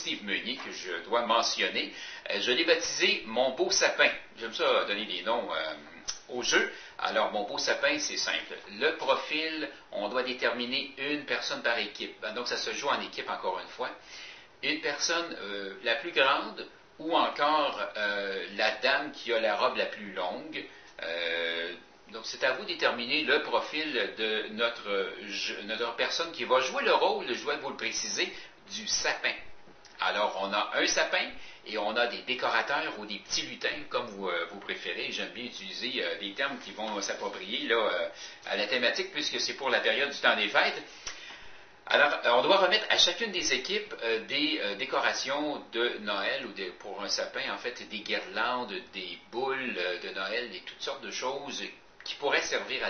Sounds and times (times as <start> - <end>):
Speech: 0.0 - 14.0, 14.6 - 40.9, 41.9 - 52.8.